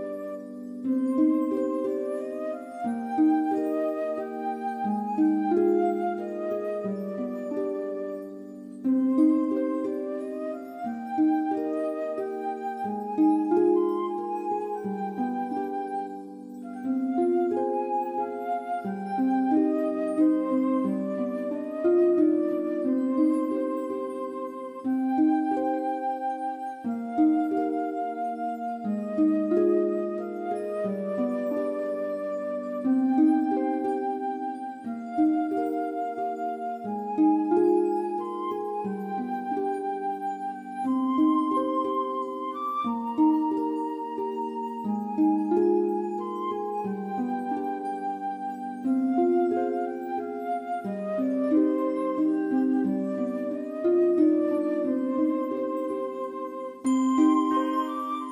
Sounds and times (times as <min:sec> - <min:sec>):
Music: 0:00.0 - 0:58.3.